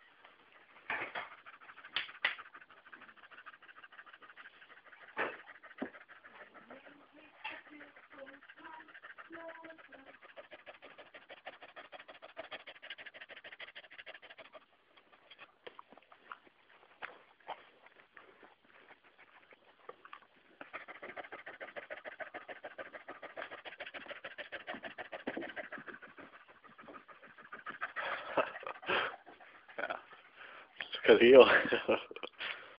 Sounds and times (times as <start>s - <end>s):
Speech: 30.9s - 31.7s
Gasp: 32.4s - 32.7s.